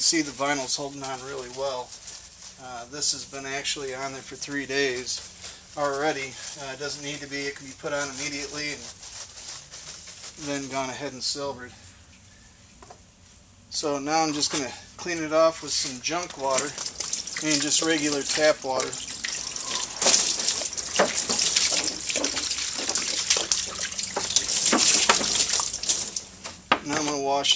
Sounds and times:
Speech: 0.0 - 1.9, 2.6 - 5.2, 5.8 - 8.9, 10.4 - 11.8, 13.7 - 16.8, 17.4 - 19.0, 26.8 - 27.5
Liquid: 16.3 - 26.4.

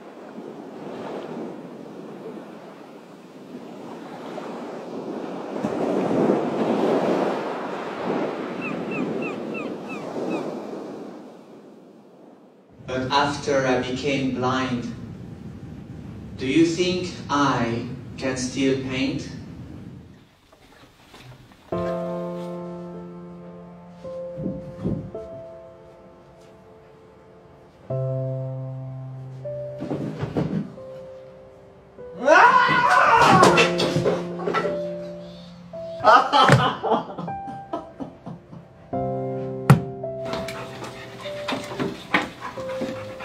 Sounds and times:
Speech: 12.9 - 15.0, 16.4 - 19.4.

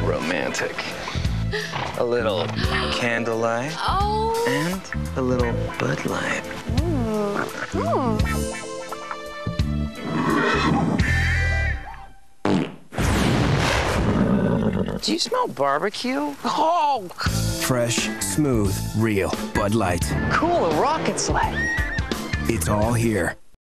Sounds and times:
Music: 0.0 - 12.4, 17.2 - 23.4
Neigh, whinny: 10.0 - 11.8, 21.5 - 22.2
Speech: 22.5 - 23.4.

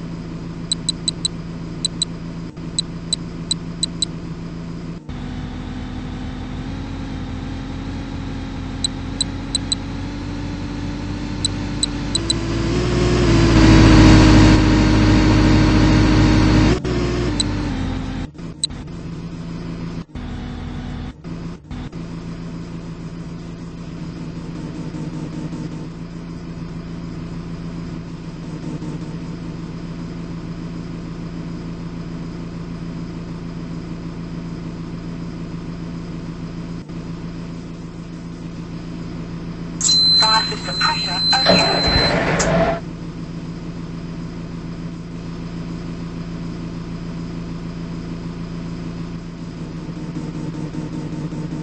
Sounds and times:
Bus: 0.0 - 51.6.

